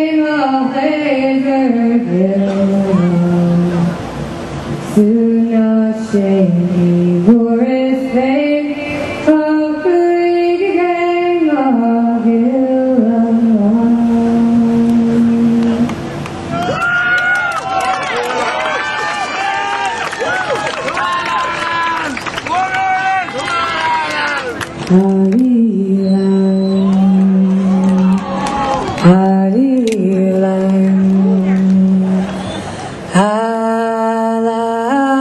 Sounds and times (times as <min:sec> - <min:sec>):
Inside, large room or hall: 0:00.0 - 0:35.2.